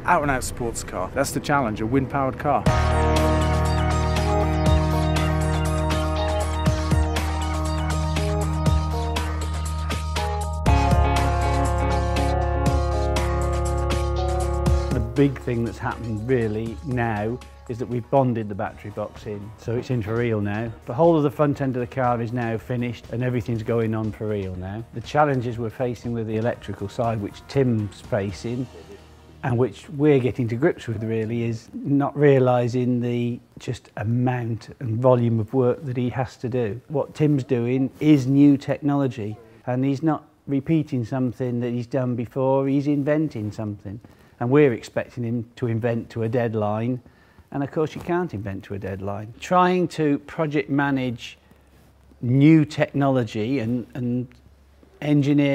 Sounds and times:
Speech: 0.0s - 2.7s, 14.9s - 51.4s, 52.2s - 54.4s, 55.0s - 55.5s
Music: 0.0s - 32.2s.

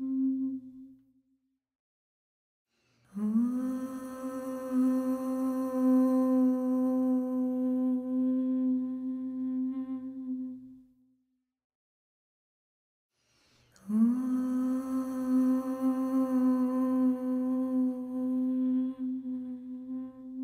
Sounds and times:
Mantra: 3.1s - 10.8s, 13.8s - 20.4s.

